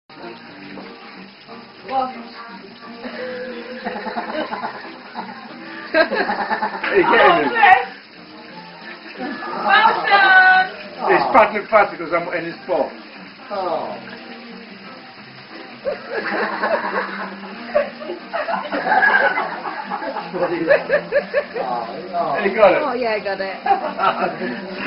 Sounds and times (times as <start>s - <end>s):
Sink (filling or washing): 0.1s - 24.8s
Water: 0.1s - 24.8s.